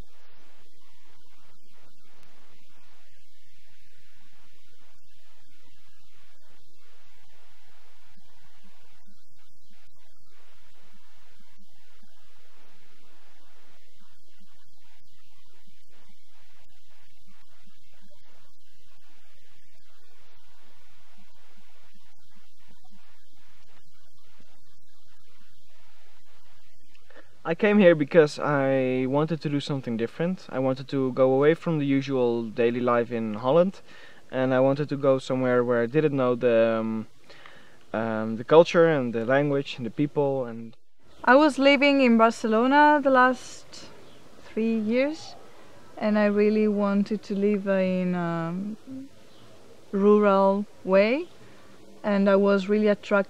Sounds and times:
Speech: 0:27.5 - 0:37.1, 0:38.0 - 0:43.9, 0:44.5 - 0:45.4, 0:46.0 - 0:49.1, 0:50.0 - 0:51.3, 0:52.1 - 0:53.2.

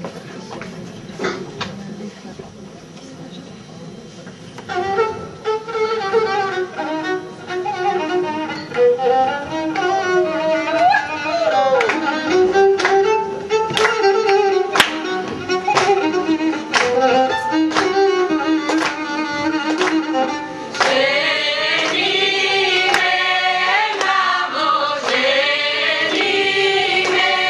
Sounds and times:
Music: 0:04.6 - 0:27.4.

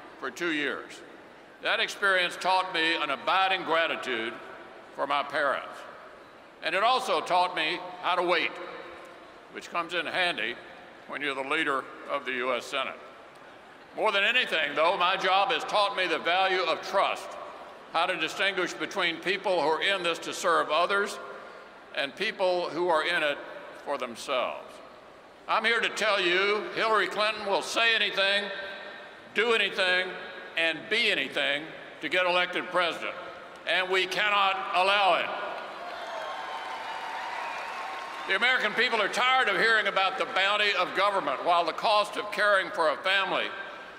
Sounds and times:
Narration, monologue: 0:00.0 - 0:35.8, 0:38.2 - 0:43.9
Male speech, man speaking: 0:00.2 - 0:01.0, 0:01.6 - 0:04.4, 0:05.0 - 0:05.9, 0:06.6 - 0:08.6, 0:09.6 - 0:13.0, 0:14.0 - 0:17.4, 0:18.0 - 0:21.2, 0:22.0 - 0:24.7, 0:25.5 - 0:28.6, 0:29.4 - 0:35.4, 0:38.3 - 0:43.6.

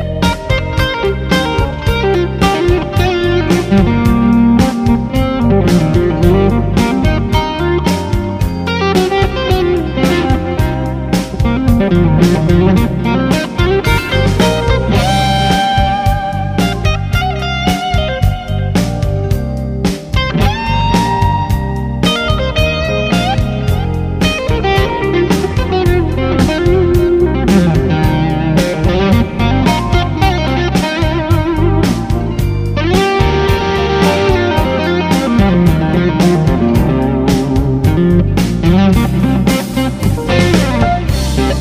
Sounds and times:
Guitar: 0:00.0 - 0:41.6.

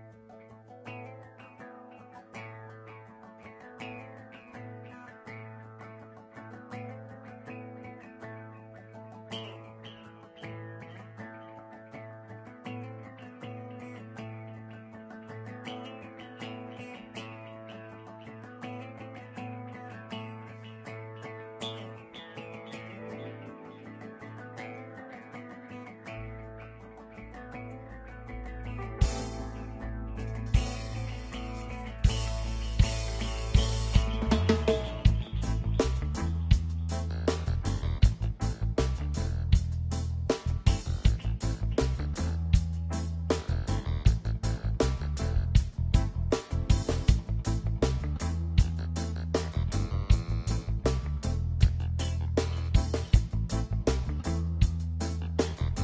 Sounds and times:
Music: 0:00.0 - 0:55.8.

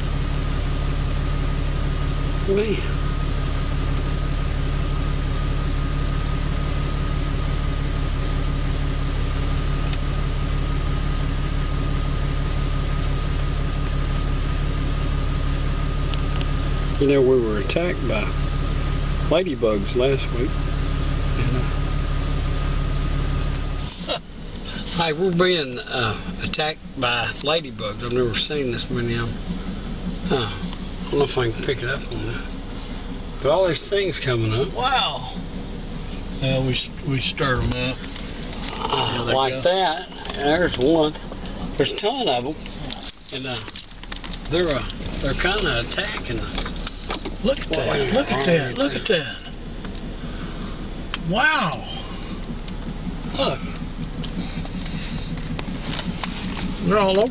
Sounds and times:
Speech: 0:02.4 - 0:03.0, 0:17.0 - 0:18.4, 0:19.3 - 0:20.6, 0:24.8 - 0:29.4, 0:30.3 - 0:32.5, 0:33.4 - 0:35.4, 0:36.4 - 0:38.0, 0:38.7 - 0:43.7, 0:44.5 - 0:46.6, 0:47.4 - 0:49.5, 0:51.2 - 0:52.0, 0:53.3 - 0:53.8, 0:56.8 - 0:57.3.

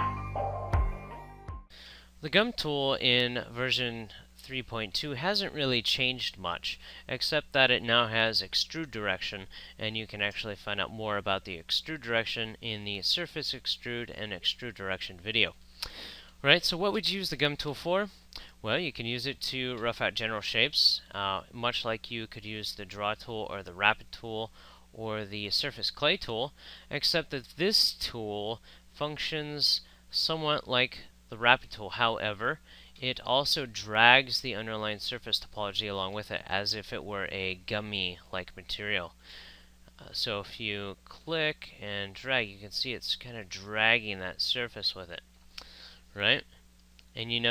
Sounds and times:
Speech: 0:02.2 - 0:15.6, 0:16.4 - 0:39.2, 0:40.0 - 0:45.2, 0:46.2 - 0:46.5, 0:47.1 - 0:47.5.

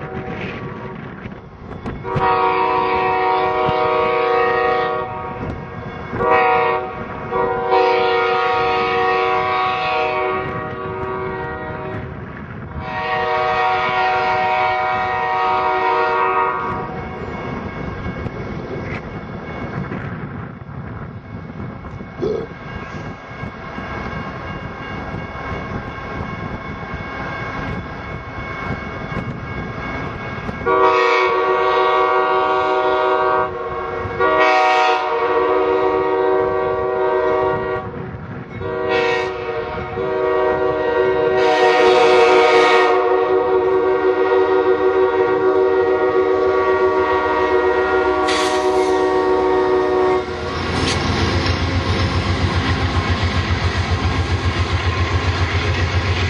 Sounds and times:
Train horn: 0:00.0 - 0:01.2, 0:01.9 - 0:17.7, 0:30.5 - 0:53.1
Railroad car, train wagon: 0:00.0 - 0:56.2.

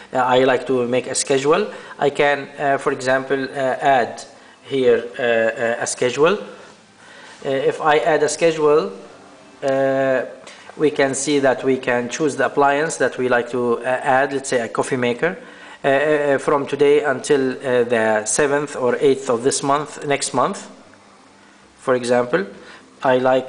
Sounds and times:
Speech: 0:00.0 - 0:06.6, 0:07.4 - 0:20.8, 0:21.8 - 0:23.4.

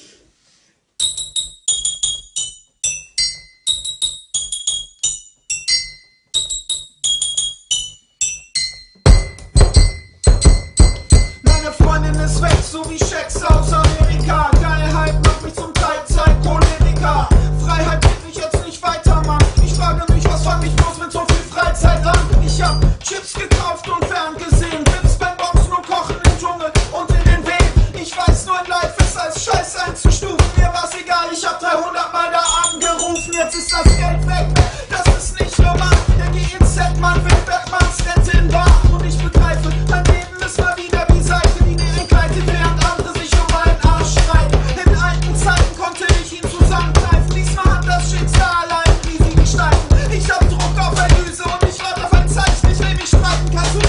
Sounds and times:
Music: 0:01.0 - 0:53.8.

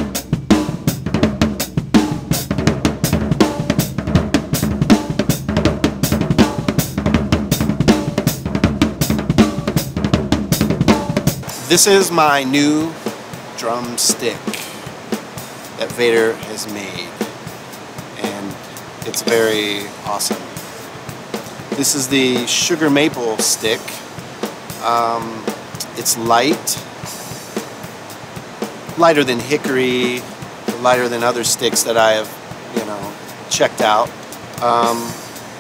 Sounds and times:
Percussion: 0:00.0 - 0:35.6
Speech: 0:11.7 - 0:13.0, 0:13.6 - 0:14.9, 0:15.8 - 0:17.3, 0:18.2 - 0:20.6, 0:21.8 - 0:24.1, 0:24.8 - 0:26.9, 0:29.0 - 0:35.2.

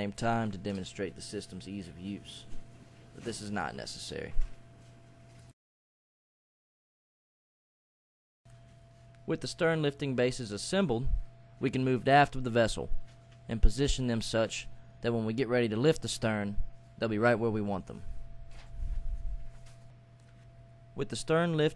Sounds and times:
Speech: 0:00.0 - 0:02.5, 0:03.2 - 0:04.4, 0:09.3 - 0:12.9, 0:13.5 - 0:18.1, 0:21.0 - 0:21.7.

